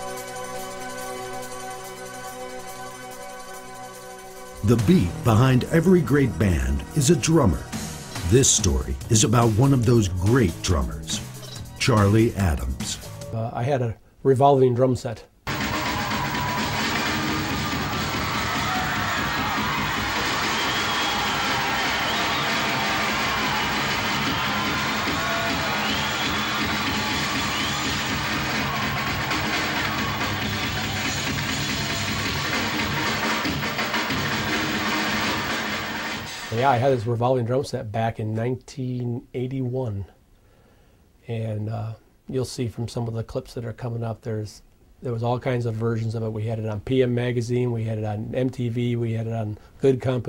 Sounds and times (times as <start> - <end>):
Drum kit: 4.6 - 13.4, 15.5 - 37.1
Speech: 4.6 - 15.3, 36.5 - 40.2, 41.2 - 50.2
Drum: 15.5 - 36.8.